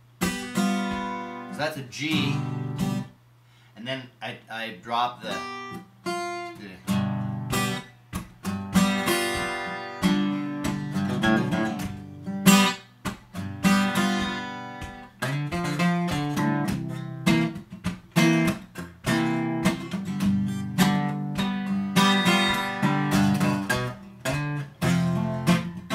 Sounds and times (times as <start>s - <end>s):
Strum: 0.0s - 3.1s, 5.2s - 25.9s
Acoustic guitar: 0.0s - 4.0s, 4.9s - 25.9s.